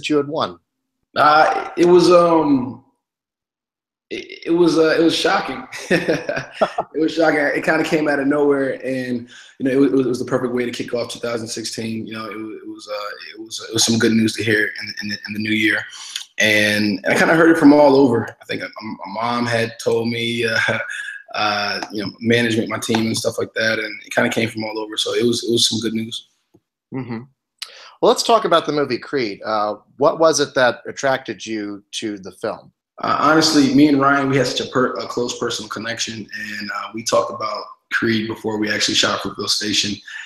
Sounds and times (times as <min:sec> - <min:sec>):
Speech: 0:00.0 - 0:00.6, 0:01.2 - 0:02.8, 0:04.1 - 0:26.2, 0:27.0 - 0:40.2.